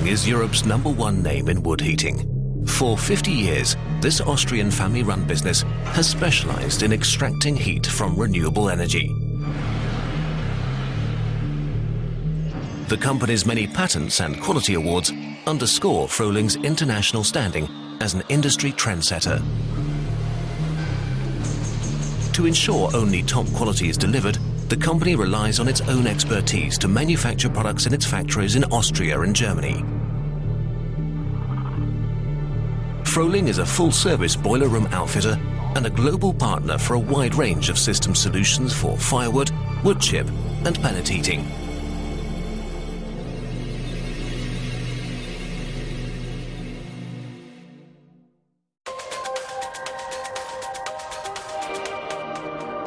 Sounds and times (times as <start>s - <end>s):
Speech: 0.0s - 9.1s, 12.9s - 19.5s, 22.3s - 29.9s, 33.1s - 41.5s.